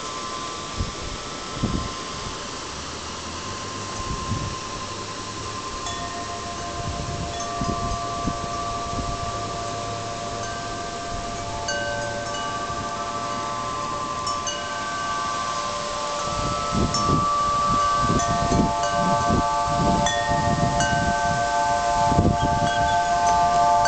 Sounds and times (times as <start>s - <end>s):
Wind chime: 0.0s - 23.8s.